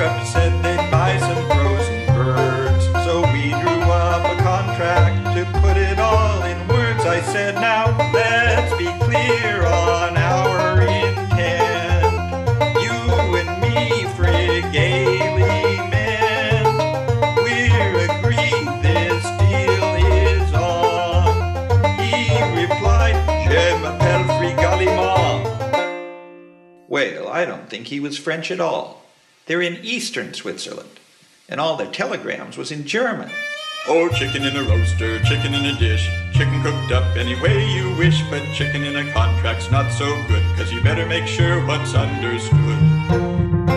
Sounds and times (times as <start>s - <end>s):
Music: 0.0s - 26.9s, 33.3s - 43.7s.